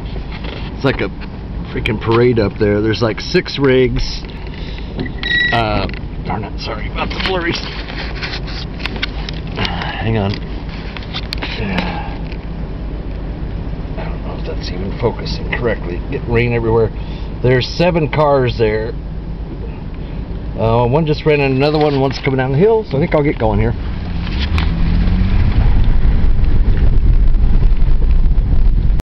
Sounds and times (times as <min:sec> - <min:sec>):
Car: 0:00.0 - 0:29.0
Speech: 0:00.8 - 0:01.1, 0:01.7 - 0:04.3, 0:05.5 - 0:07.7, 0:14.0 - 0:19.0, 0:20.6 - 0:23.8.